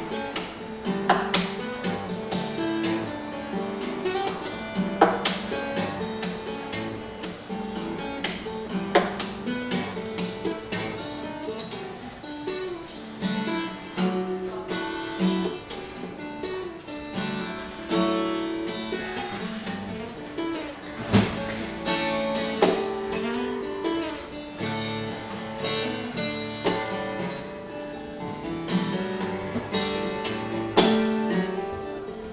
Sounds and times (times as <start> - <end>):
Acoustic guitar: 0.0 - 32.3
Strum: 0.0 - 32.3.